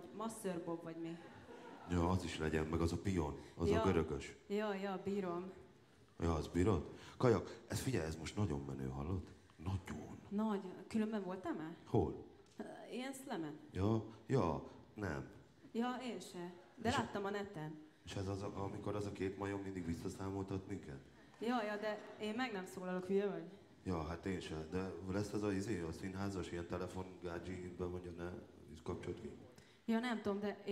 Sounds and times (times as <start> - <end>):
Speech: 1.9 - 5.5, 6.2 - 30.7.